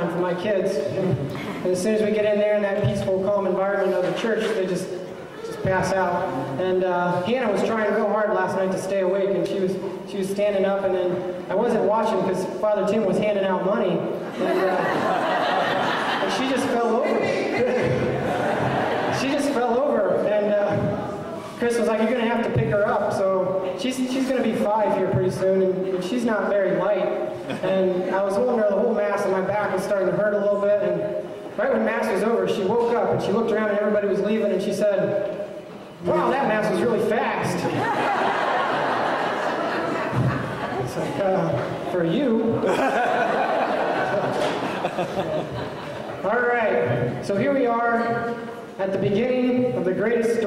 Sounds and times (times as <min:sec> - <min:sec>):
Speech: 0:00.0 - 0:14.9, 0:16.2 - 0:18.0, 0:19.1 - 0:35.3, 0:36.0 - 0:37.9, 0:40.8 - 0:42.6, 0:46.2 - 0:50.4.